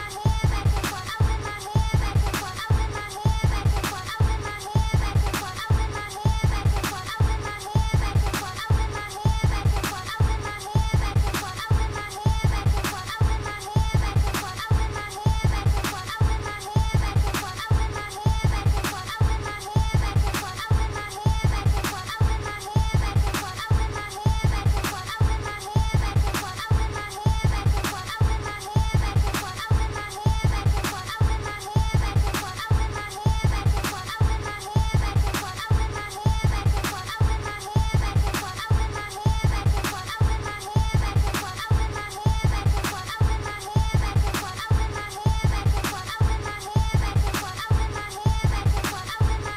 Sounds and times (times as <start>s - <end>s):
Music: 0.0s - 49.5s.